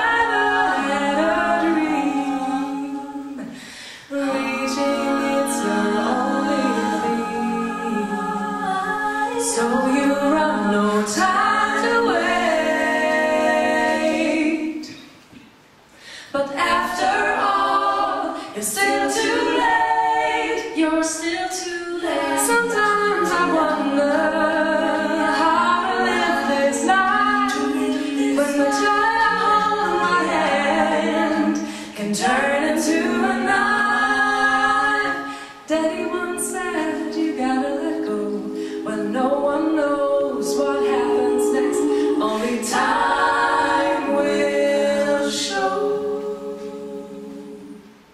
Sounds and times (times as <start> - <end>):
Music: 0.0 - 15.2, 16.3 - 48.1.